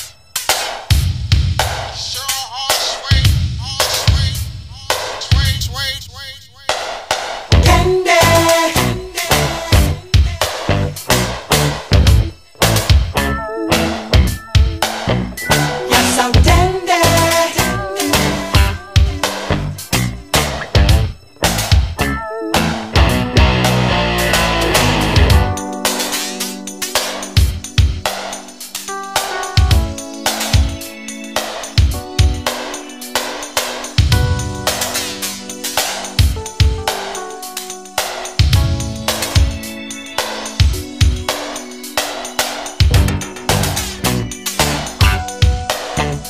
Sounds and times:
Disco: 0:01.6 - 0:46.2.

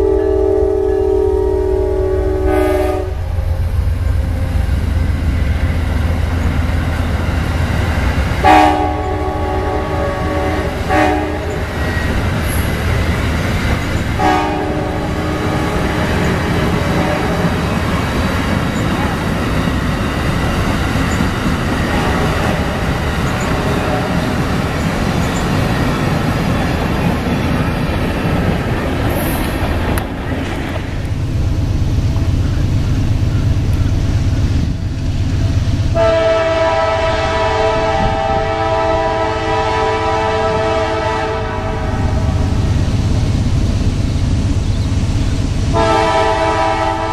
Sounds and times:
Train: 0:00.0 - 0:47.1.

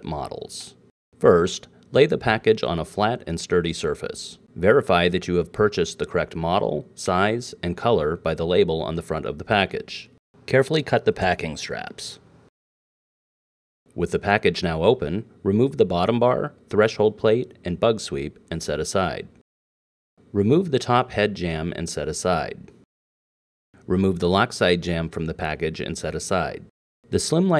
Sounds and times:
Speech: 0:00.0 - 0:12.2, 0:13.9 - 0:19.4, 0:20.3 - 0:22.8, 0:23.8 - 0:27.5.

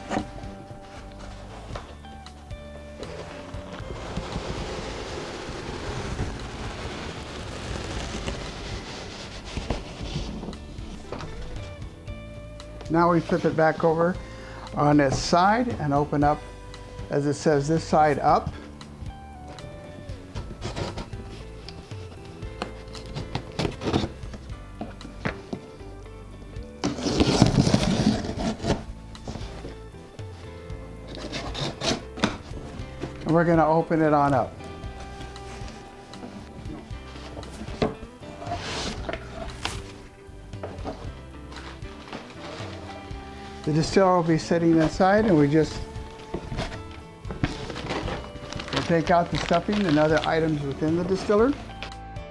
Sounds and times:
Music: 0:00.0 - 0:52.3
Speech: 0:12.9 - 0:14.2, 0:14.8 - 0:16.4, 0:17.1 - 0:18.5, 0:33.2 - 0:34.5, 0:43.7 - 0:45.8, 0:48.8 - 0:51.6.

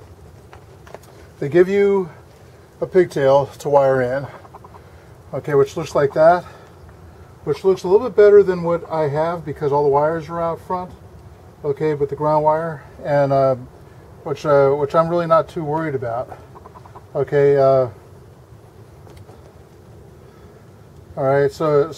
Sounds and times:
Speech: 0:01.4 - 0:02.2, 0:02.8 - 0:04.4, 0:05.3 - 0:06.6, 0:07.4 - 0:11.0, 0:11.6 - 0:16.4, 0:17.1 - 0:18.0, 0:21.2 - 0:21.9.

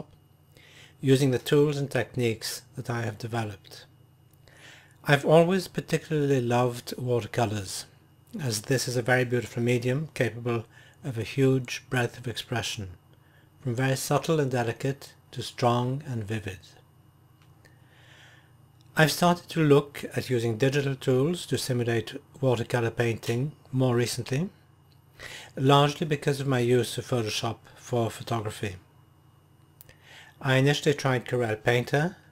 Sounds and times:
Speech: 0:01.0 - 0:03.9, 0:05.0 - 0:13.0, 0:13.6 - 0:16.8, 0:18.9 - 0:24.6, 0:25.6 - 0:28.9, 0:30.4 - 0:32.3.

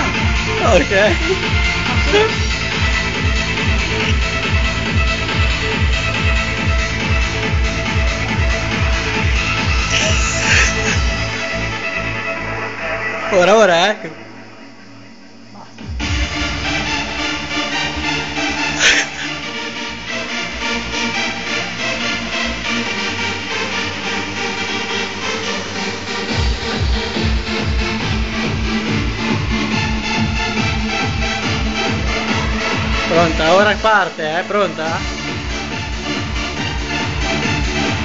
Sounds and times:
Techno: 0:00.0 - 0:38.0.

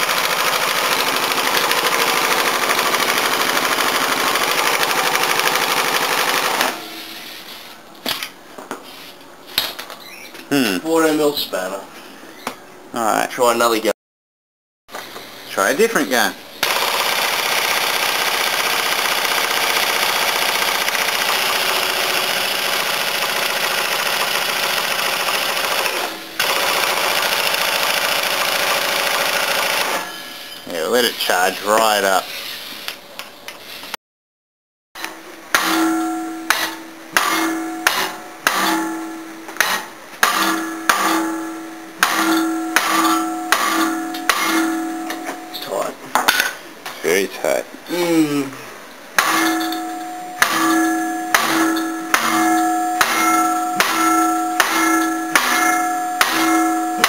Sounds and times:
Speech: 0:10.5 - 0:11.9, 0:12.9 - 0:14.0, 0:15.5 - 0:16.4, 0:30.7 - 0:32.3, 0:45.6 - 0:46.0, 0:47.0 - 0:48.6.

